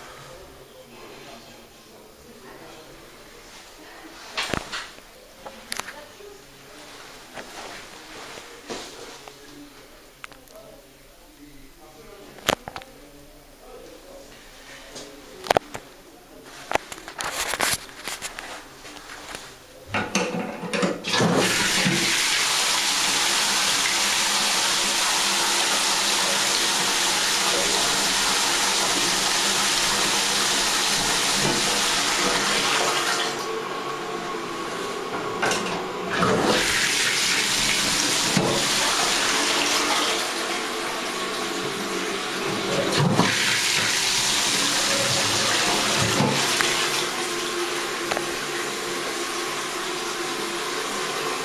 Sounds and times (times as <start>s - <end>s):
Toilet flush: 20.0s - 51.4s.